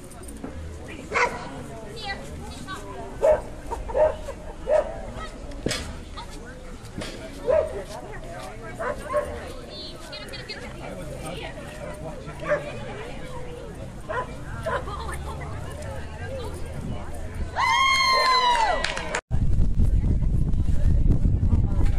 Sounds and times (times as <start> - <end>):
Speech: 4.6 - 17.6.